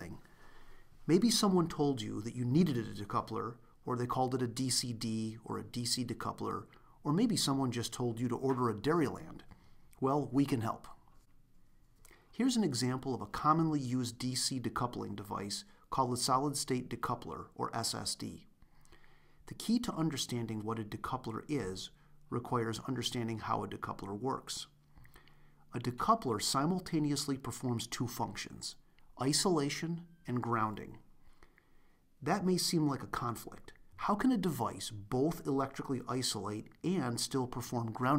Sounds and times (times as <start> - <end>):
Narration, monologue: 0.0 - 38.1.